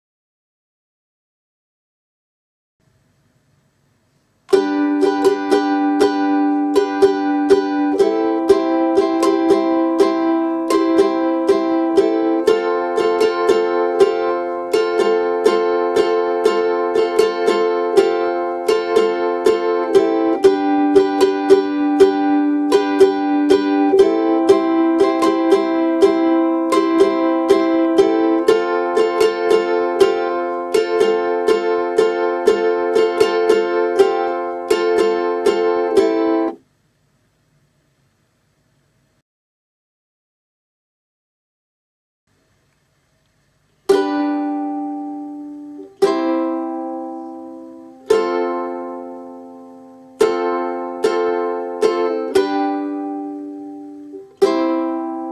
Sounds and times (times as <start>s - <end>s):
Ukulele: 4.5s - 36.6s, 43.8s - 55.3s
Acoustic guitar: 4.5s - 36.7s, 43.9s - 55.3s.